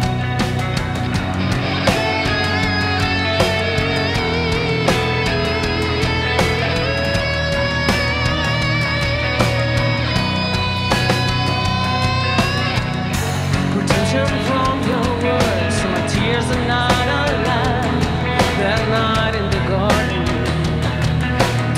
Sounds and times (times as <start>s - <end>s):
Heavy metal: 0.0s - 21.7s
Progressive rock: 0.0s - 21.7s
Singing: 13.7s - 20.8s.